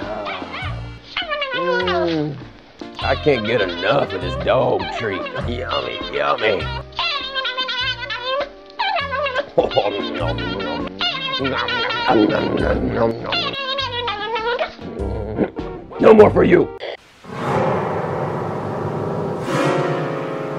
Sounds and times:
Music: 0.0s - 20.5s
Speech: 3.0s - 6.7s, 11.4s - 13.6s, 16.0s - 16.8s.

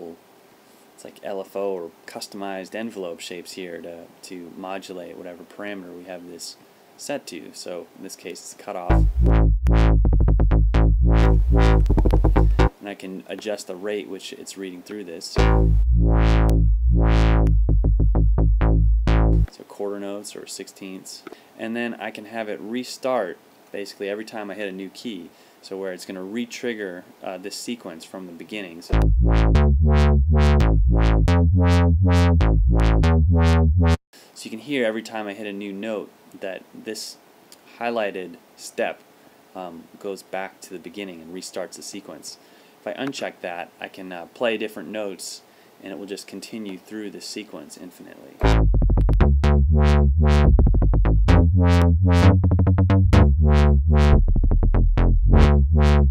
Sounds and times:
Speech: 0.0s - 0.2s, 1.0s - 9.0s, 12.7s - 15.4s, 19.5s - 29.0s, 34.3s - 39.0s, 39.6s - 48.4s
Synthesizer: 11.1s - 12.7s, 15.4s - 17.5s.

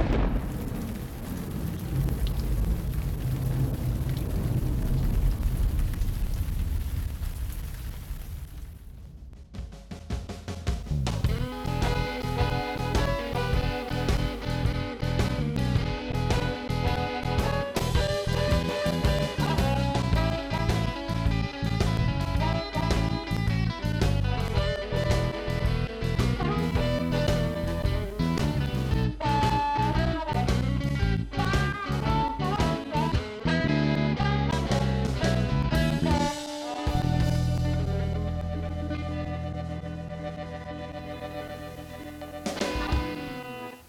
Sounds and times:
Music: 9.3s - 43.8s.

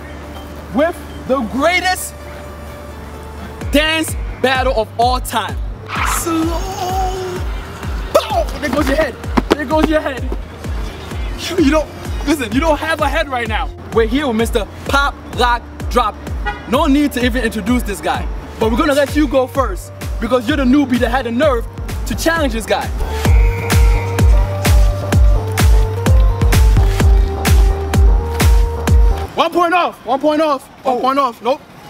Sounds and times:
Music: 0.0s - 29.3s
Speech: 3.8s - 7.4s, 8.2s - 10.3s, 11.4s - 22.9s, 29.4s - 31.7s.

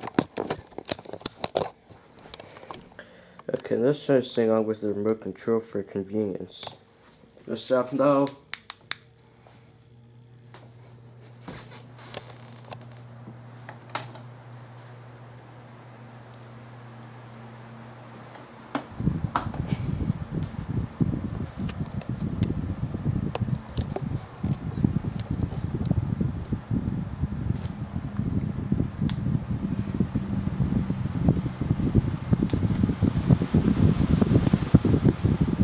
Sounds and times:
Speech: 3.5s - 6.8s, 7.4s - 8.4s.

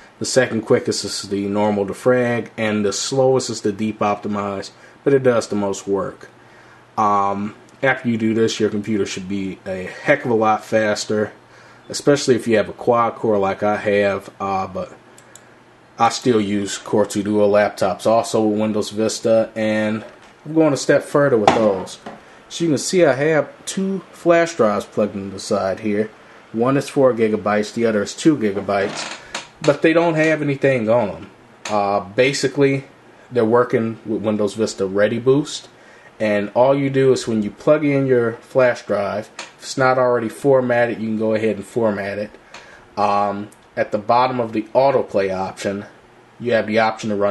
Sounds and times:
Speech: 0.0s - 6.4s, 7.0s - 15.0s, 16.0s - 42.4s, 43.0s - 47.3s
Inside, small room: 0.0s - 47.3s.

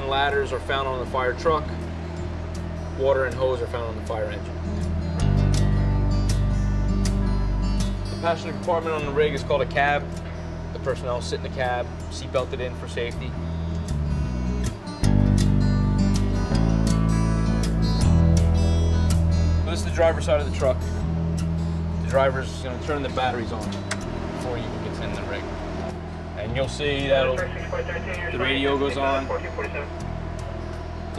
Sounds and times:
Speech: 0.0s - 1.8s, 3.0s - 4.5s, 8.2s - 10.1s, 10.8s - 13.3s, 19.7s - 20.8s, 22.1s - 23.7s, 24.4s - 25.4s, 26.4s - 29.9s
Music: 0.0s - 31.1s
Truck: 0.0s - 31.1s.

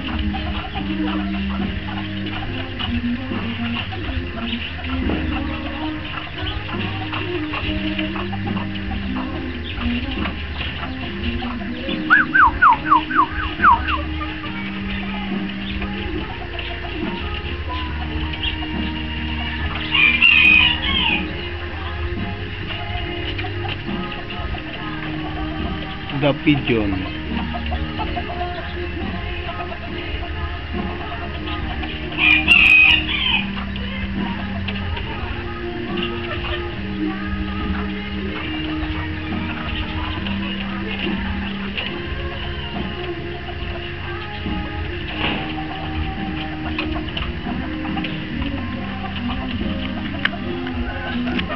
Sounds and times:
Music: 0.0s - 51.5s
Pigeon, dove: 0.0s - 51.5s.

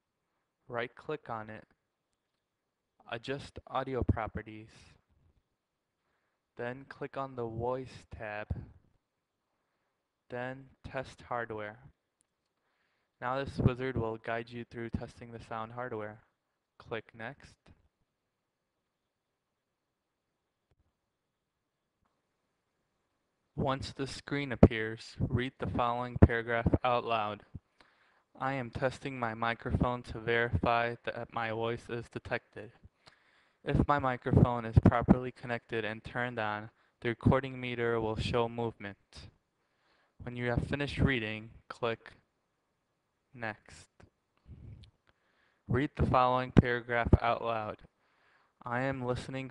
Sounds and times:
Speech: 0.7s - 1.8s, 3.0s - 5.1s, 6.6s - 8.8s, 10.3s - 12.0s, 13.2s - 17.8s, 23.6s - 27.6s, 28.4s - 32.9s, 33.6s - 39.4s, 40.2s - 42.3s, 43.4s - 44.9s, 45.7s - 47.9s, 48.6s - 49.5s.

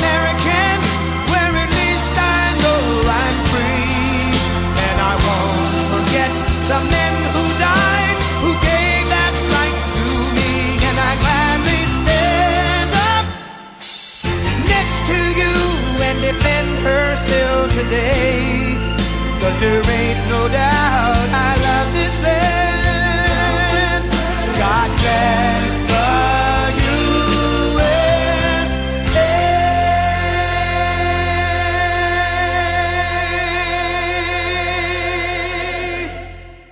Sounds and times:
Music: 0.0s - 36.7s.

